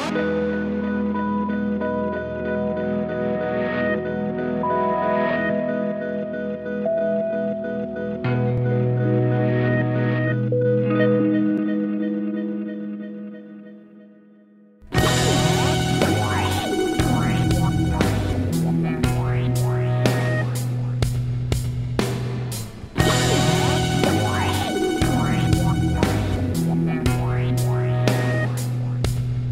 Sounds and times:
Music: 0.0s - 29.5s.

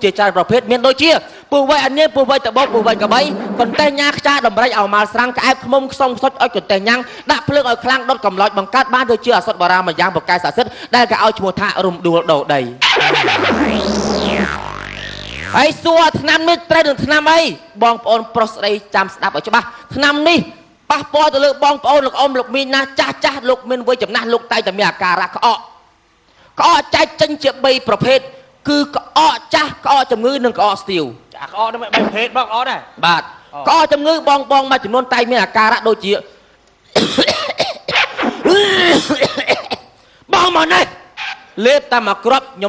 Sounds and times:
Speech: 0.0s - 12.8s, 15.6s - 25.8s, 26.6s - 36.3s, 40.3s - 41.0s, 41.6s - 42.6s.

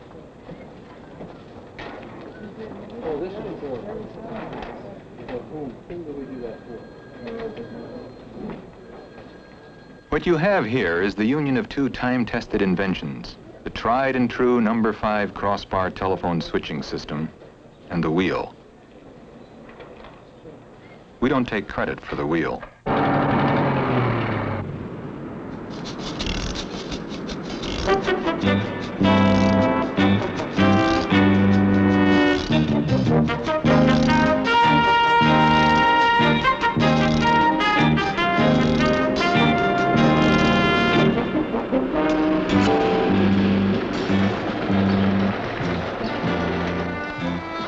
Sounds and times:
Music: 27.8s - 47.6s.

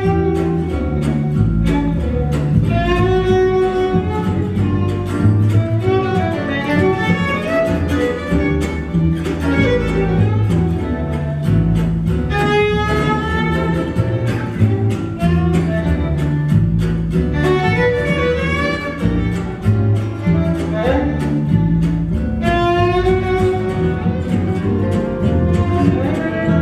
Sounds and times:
Violin, fiddle: 0.0s - 11.3s, 17.2s - 26.6s.

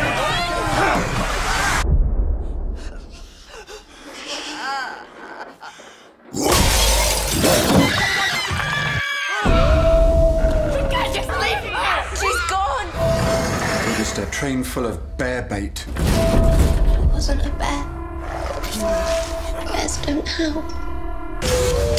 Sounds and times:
Music: 9.5s - 21.9s.

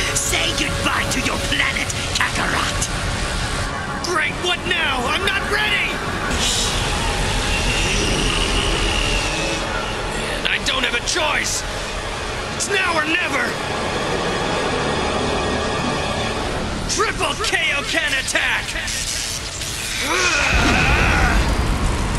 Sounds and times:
Speech: 0.0s - 2.9s, 4.0s - 6.7s, 10.2s - 11.6s, 12.6s - 13.6s, 16.9s - 19.2s
Music: 0.0s - 22.1s.

